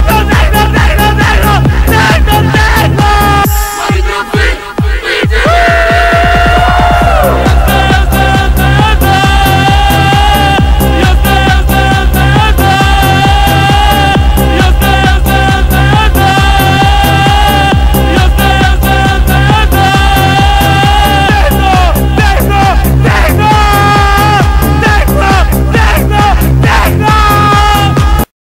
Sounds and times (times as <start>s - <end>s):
Techno: 0.0s - 28.3s.